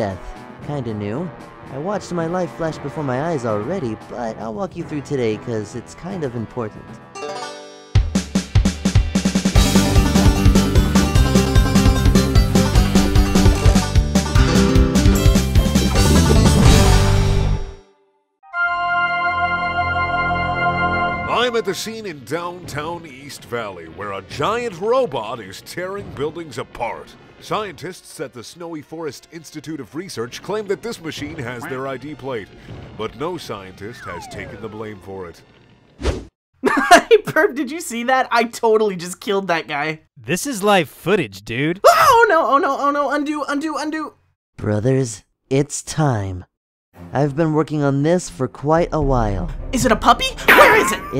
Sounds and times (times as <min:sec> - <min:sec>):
Speech: 0:00.0 - 0:07.0, 0:21.3 - 0:35.4, 0:36.9 - 0:46.5, 0:47.1 - 0:51.1
Music: 0:00.0 - 0:23.2, 0:47.0 - 0:51.1.